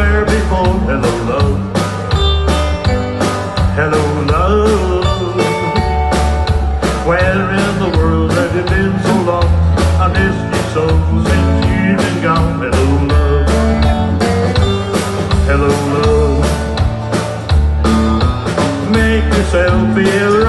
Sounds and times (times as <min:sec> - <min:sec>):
Country: 0:00.0 - 0:20.4.